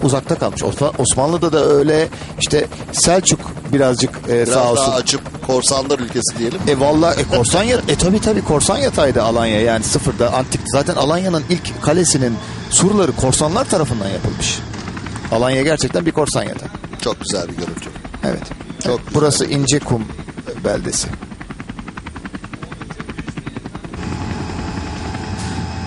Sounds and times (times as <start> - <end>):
Speech: 0.0 - 14.6, 15.3 - 21.2, 22.6 - 24.0.